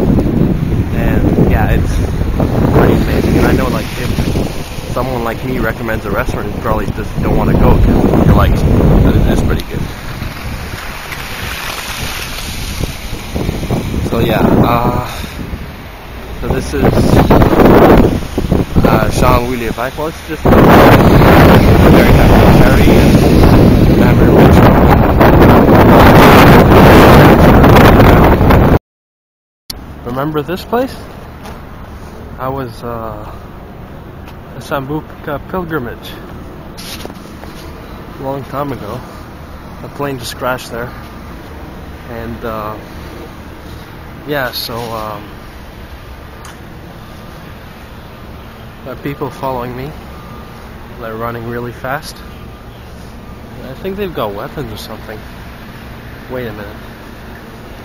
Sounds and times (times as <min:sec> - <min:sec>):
Outside, urban or manmade: 0:00.0 - 0:28.8, 0:29.7 - 0:57.8
Speech: 0:00.9 - 0:02.0, 0:02.7 - 0:04.2, 0:04.9 - 0:09.9, 0:14.0 - 0:15.3, 0:16.4 - 0:17.3, 0:18.8 - 0:20.6, 0:21.8 - 0:23.2, 0:24.0 - 0:24.7, 0:30.0 - 0:31.1, 0:32.4 - 0:33.4, 0:34.5 - 0:36.2, 0:38.2 - 0:39.1, 0:39.8 - 0:41.0, 0:42.1 - 0:42.8, 0:44.2 - 0:45.4, 0:48.8 - 0:50.0, 0:51.0 - 0:52.3, 0:53.6 - 0:55.2, 0:56.3 - 0:56.8.